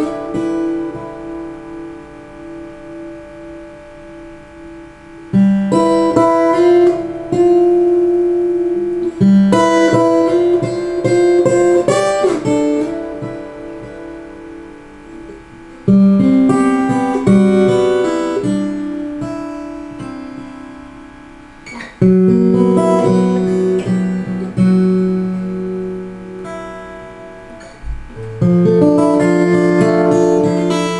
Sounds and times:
Strum: 0.0s - 30.9s.

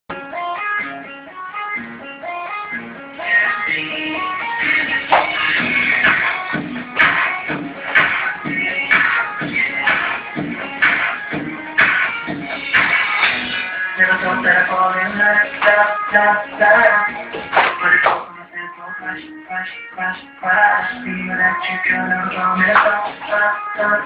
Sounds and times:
Inside, small room: 0.1s - 24.0s
Music: 0.1s - 24.0s.

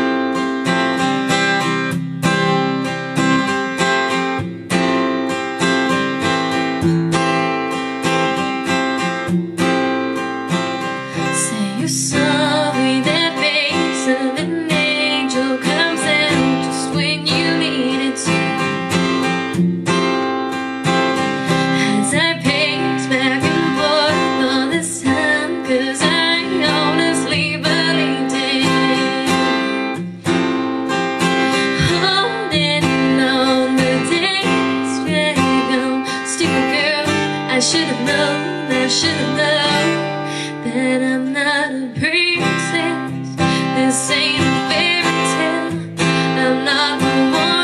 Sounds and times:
Strum: 0.0s - 47.6s.

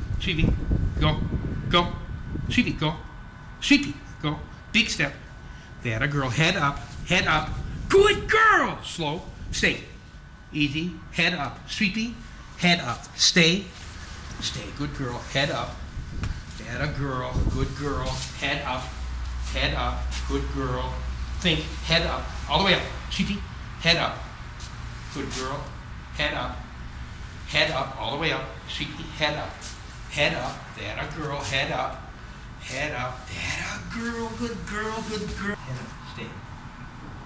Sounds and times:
Speech: 0.2s - 5.2s, 5.8s - 13.8s, 14.4s - 15.8s, 16.6s - 24.3s, 25.1s - 26.7s, 27.5s - 36.4s.

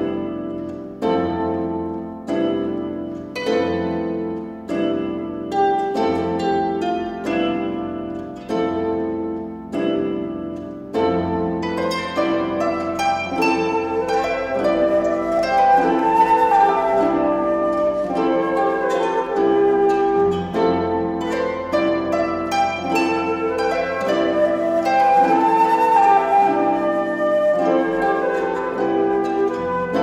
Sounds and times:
Flute: 11.3s - 30.0s.

